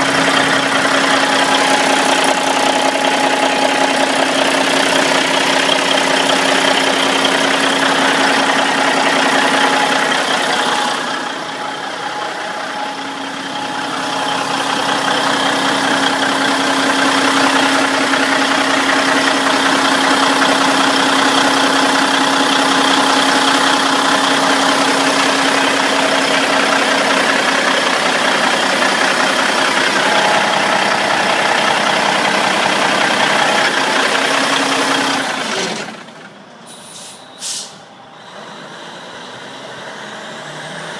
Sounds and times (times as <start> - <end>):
Truck: 0.0 - 40.9.